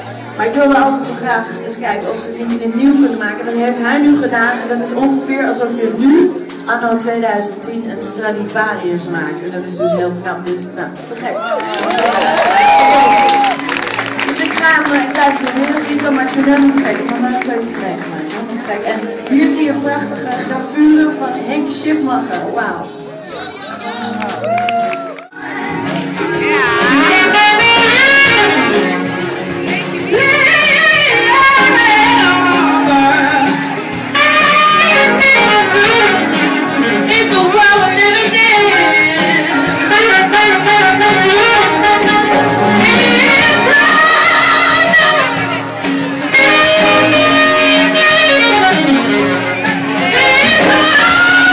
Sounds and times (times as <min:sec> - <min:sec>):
Music: 0:00.0 - 0:51.5
Speech: 0:00.4 - 0:11.5, 0:14.3 - 0:24.3.